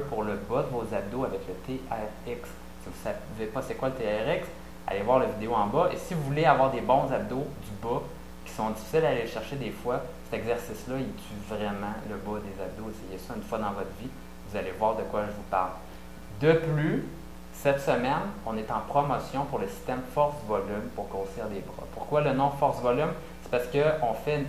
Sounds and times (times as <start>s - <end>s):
Speech: 0.0s - 24.4s.